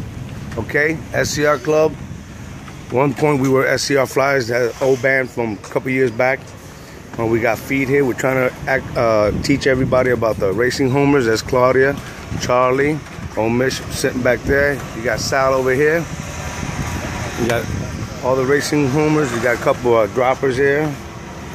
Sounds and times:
Outside, urban or manmade: 0:00.0 - 0:21.5
Speech: 0:00.5 - 0:02.0, 0:02.9 - 0:06.4, 0:07.2 - 0:16.1, 0:17.2 - 0:21.0.

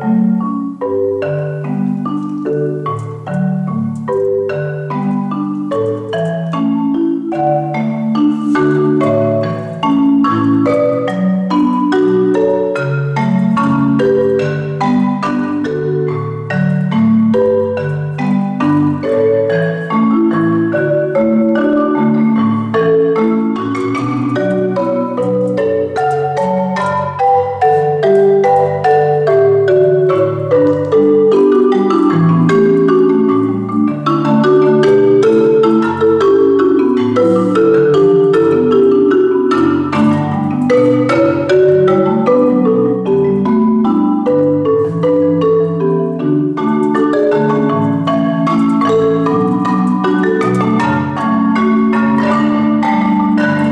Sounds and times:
Marimba, xylophone: 0:00.0 - 0:53.7.

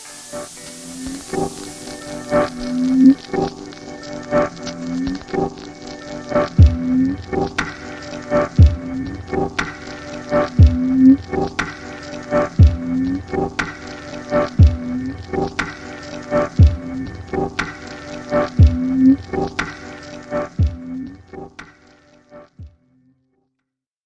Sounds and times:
Music: 0:00.0 - 0:23.7.

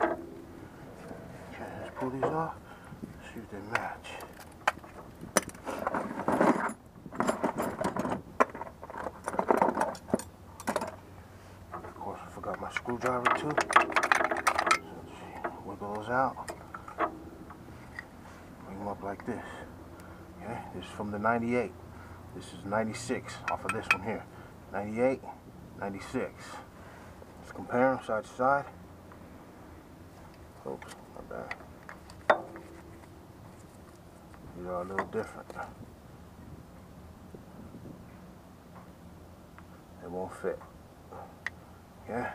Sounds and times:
Outside, urban or manmade: 0:00.0 - 0:42.3
Speech: 0:01.5 - 0:02.6, 0:03.2 - 0:04.3, 0:11.9 - 0:13.7, 0:14.9 - 0:16.5, 0:18.6 - 0:19.7, 0:20.4 - 0:21.8, 0:22.4 - 0:26.7, 0:27.4 - 0:28.8, 0:30.6 - 0:31.6, 0:34.5 - 0:35.8, 0:40.0 - 0:40.7, 0:42.0 - 0:42.3.

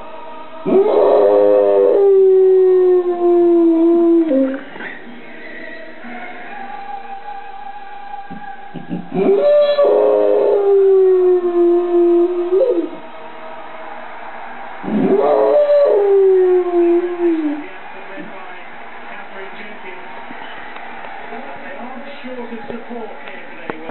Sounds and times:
Howl: 0:00.6 - 0:04.8, 0:08.3 - 0:13.1, 0:14.8 - 0:17.7
Speech: 0:16.6 - 0:20.5, 0:21.3 - 0:23.9.

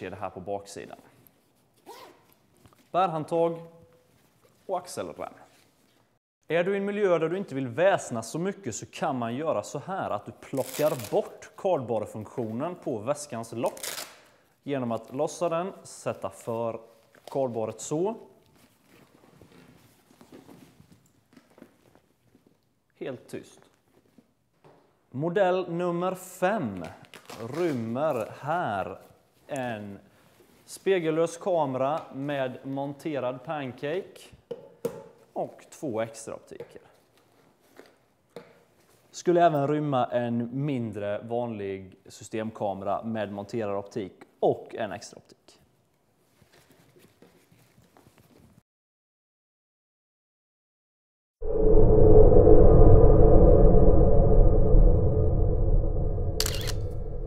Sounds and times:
Speech: 0:00.0 - 0:01.2, 0:02.9 - 0:03.8, 0:04.7 - 0:05.6, 0:06.5 - 0:13.8, 0:14.6 - 0:18.4, 0:23.0 - 0:23.7, 0:25.1 - 0:30.1, 0:30.7 - 0:34.4, 0:35.4 - 0:37.0, 0:39.1 - 0:45.7.

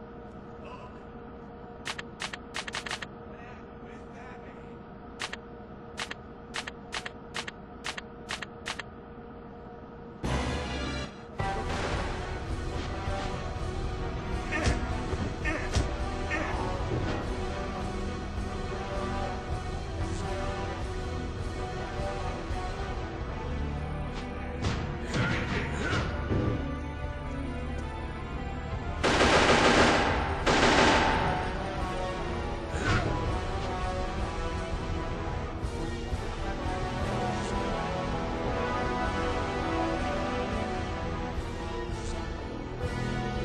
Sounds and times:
Music: 0:00.0 - 0:43.4.

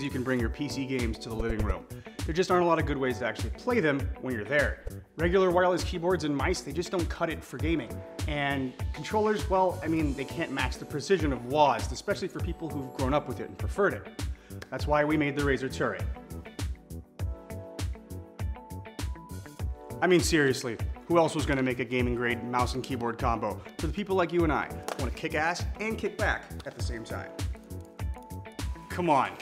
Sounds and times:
Speech: 0:00.0 - 0:14.1, 0:14.7 - 0:16.2, 0:20.0 - 0:27.4, 0:28.9 - 0:29.4
Music: 0:00.0 - 0:29.4.

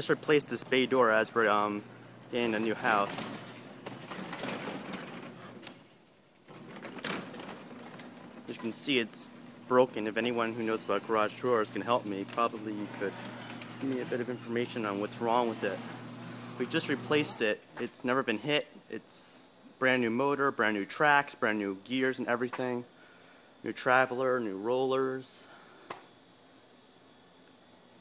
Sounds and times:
Speech: 0:00.0 - 0:03.3, 0:08.5 - 0:13.2, 0:13.8 - 0:15.9, 0:16.6 - 0:22.9, 0:23.6 - 0:25.5
Sliding door: 0:00.4 - 0:17.5.

